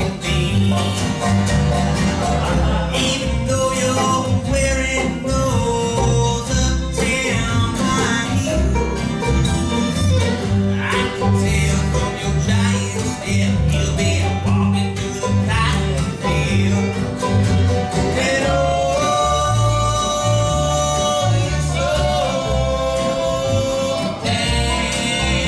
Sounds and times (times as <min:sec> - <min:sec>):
Male singing: 0:00.0 - 0:01.0, 0:02.4 - 0:08.7, 0:10.8 - 0:17.0, 0:18.2 - 0:25.4
Bluegrass: 0:00.0 - 0:25.4.